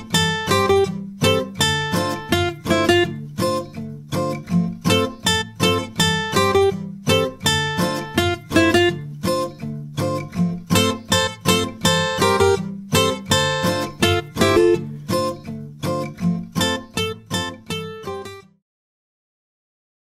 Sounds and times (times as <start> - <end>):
Music: 0.0 - 18.6.